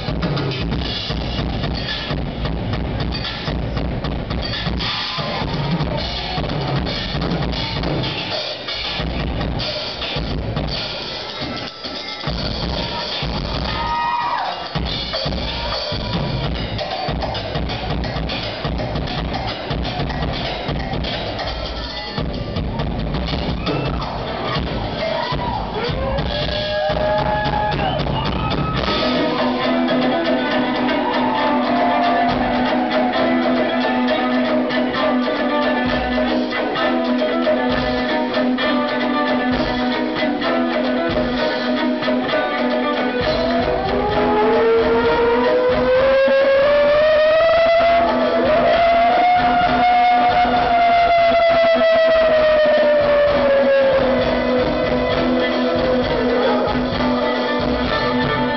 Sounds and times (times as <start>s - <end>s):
Music: 0.0s - 58.5s.